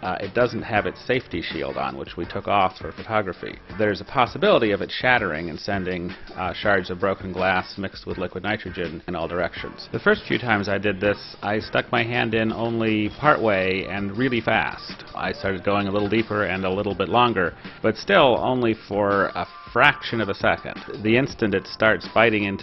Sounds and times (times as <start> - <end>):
Speech: 0.0 - 22.6.